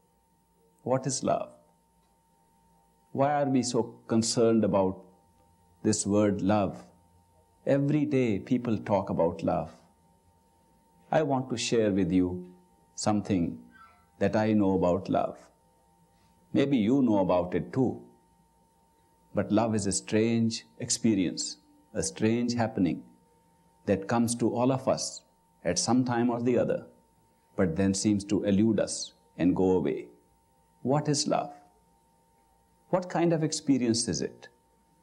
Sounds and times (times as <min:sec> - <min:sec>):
Speech: 0:00.8 - 0:01.6, 0:03.2 - 0:05.1, 0:05.8 - 0:07.0, 0:07.7 - 0:09.8, 0:11.1 - 0:15.5, 0:16.5 - 0:18.1, 0:19.4 - 0:23.2, 0:23.9 - 0:26.9, 0:27.6 - 0:30.2, 0:30.8 - 0:31.7, 0:32.9 - 0:34.6.